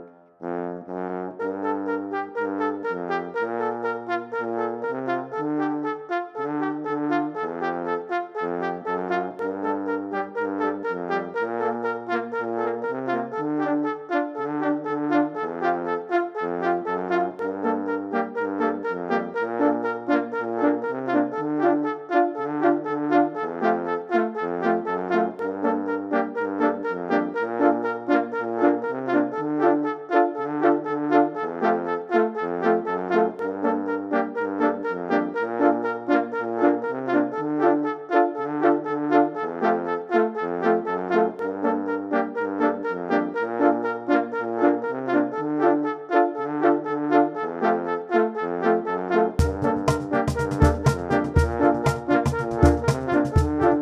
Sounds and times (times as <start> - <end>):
French horn: 0.0 - 53.8.